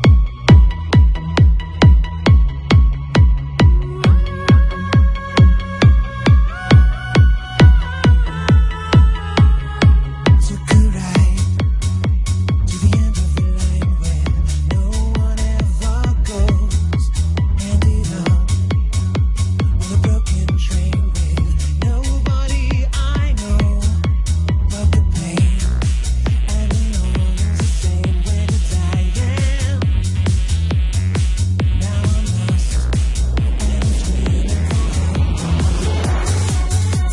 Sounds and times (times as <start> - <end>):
Techno: 0.0 - 37.1
Trance music: 0.0 - 37.1.